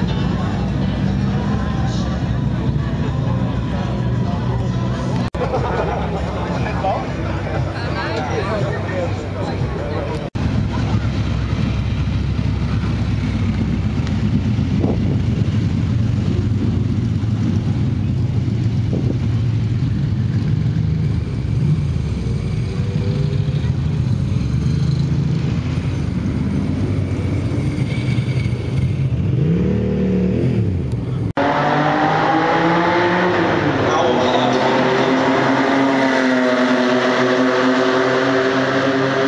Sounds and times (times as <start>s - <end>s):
Speech: 6.1s - 11.3s, 33.8s - 34.9s.